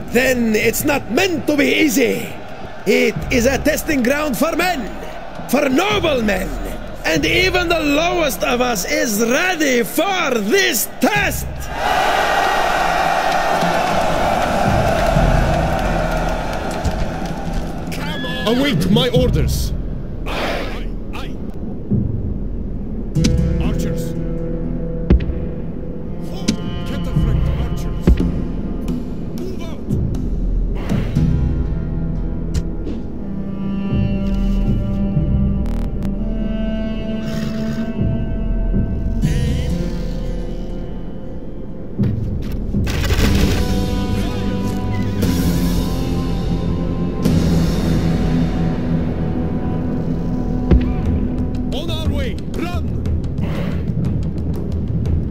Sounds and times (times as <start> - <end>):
Music: 0.0 - 55.3
Speech: 0.1 - 11.7, 18.0 - 21.4, 23.6 - 24.2, 26.2 - 28.2, 29.4 - 30.0, 51.7 - 53.0.